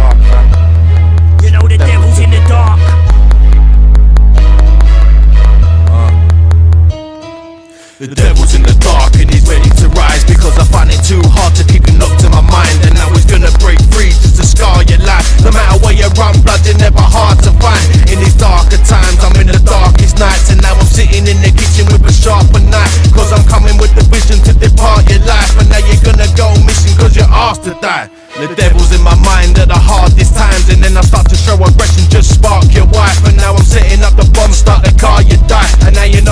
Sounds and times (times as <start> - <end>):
Dance music: 0.0 - 36.3.